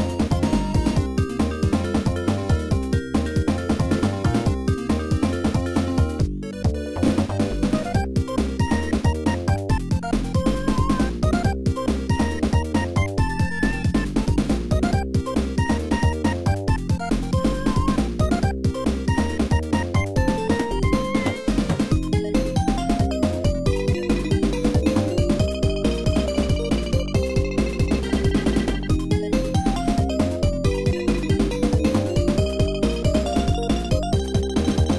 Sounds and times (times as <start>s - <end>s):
Background music: 0.0s - 34.9s.